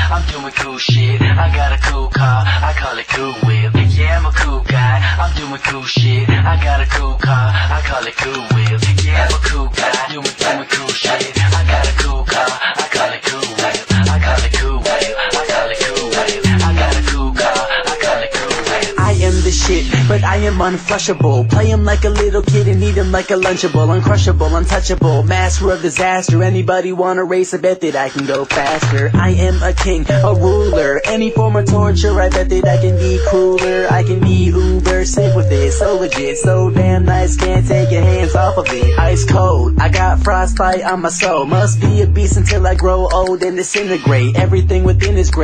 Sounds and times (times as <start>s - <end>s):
Music: 0.0s - 45.4s.